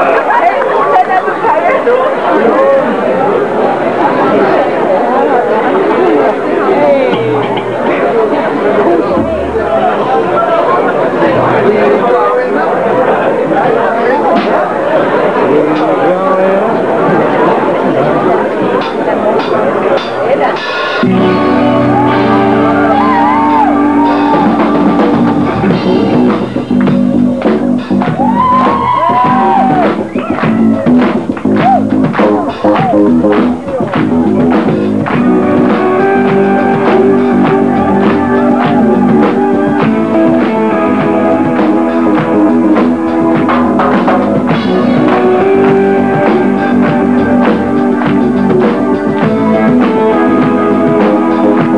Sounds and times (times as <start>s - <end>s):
Speech: 0.0s - 21.2s, 29.4s - 35.9s
Music: 3.4s - 51.7s.